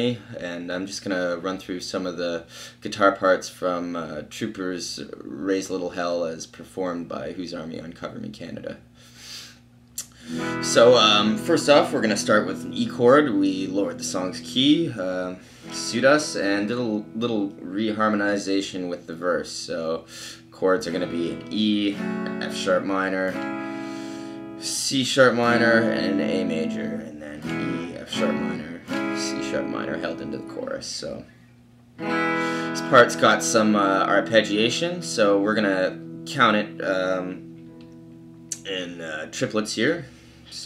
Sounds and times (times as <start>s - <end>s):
Guitar: 0.0s - 8.8s, 9.8s - 40.6s
Speech: 0.0s - 8.8s, 10.0s - 23.4s, 24.6s - 31.3s, 32.8s - 37.4s, 38.6s - 40.6s.